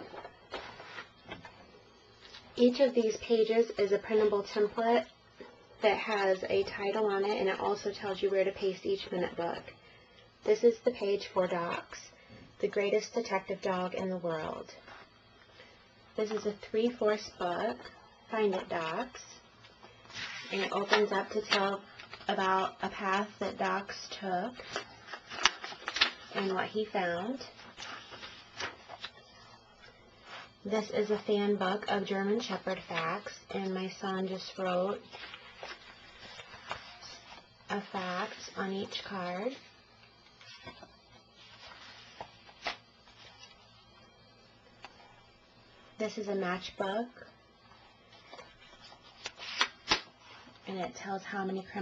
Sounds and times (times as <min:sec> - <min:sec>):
Speech: 0:02.6 - 0:05.1, 0:05.8 - 0:09.7, 0:10.4 - 0:14.8, 0:16.2 - 0:19.4, 0:20.5 - 0:24.6, 0:26.3 - 0:27.5, 0:30.6 - 0:35.0, 0:37.0 - 0:39.6, 0:46.0 - 0:47.3, 0:50.6 - 0:51.8.